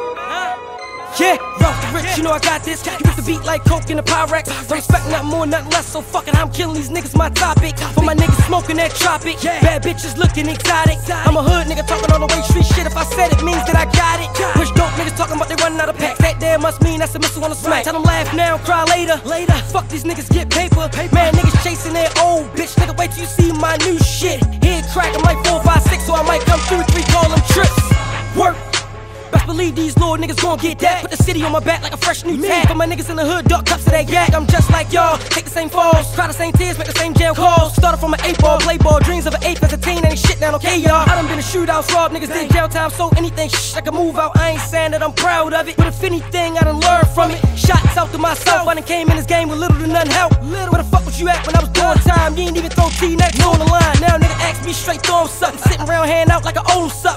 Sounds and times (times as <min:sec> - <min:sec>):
Music: 0:00.0 - 0:57.1.